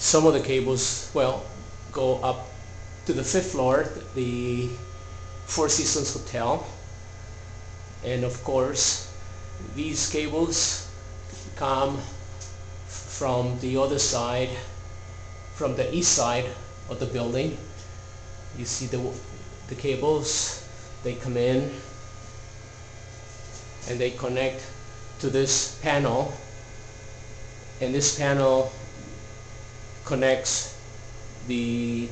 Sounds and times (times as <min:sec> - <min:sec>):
Speech: 0:00.0 - 0:04.9, 0:05.5 - 0:06.8, 0:08.0 - 0:10.9, 0:11.6 - 0:12.2, 0:13.0 - 0:14.8, 0:15.6 - 0:17.8, 0:18.6 - 0:21.9, 0:23.9 - 0:26.5, 0:27.8 - 0:28.8, 0:30.0 - 0:30.8, 0:31.4 - 0:32.1.